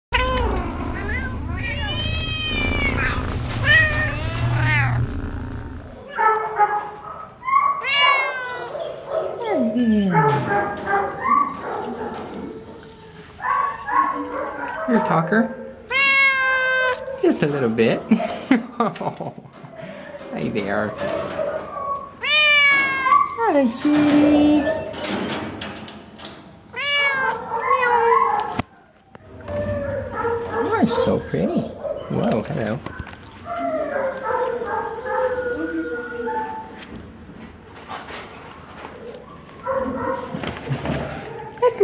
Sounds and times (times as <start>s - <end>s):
Cat: 0.1s - 6.8s, 7.4s - 8.9s, 15.9s - 17.1s, 21.3s - 23.4s, 26.7s - 28.7s
Bow-wow: 6.0s - 7.3s, 29.6s - 30.8s, 39.6s - 40.4s
Bark: 6.2s - 7.8s, 8.6s - 9.4s, 10.1s - 12.4s, 13.4s - 15.7s, 27.4s - 28.6s, 29.8s - 31.0s, 31.8s - 32.3s, 32.9s - 35.6s, 39.6s - 40.4s.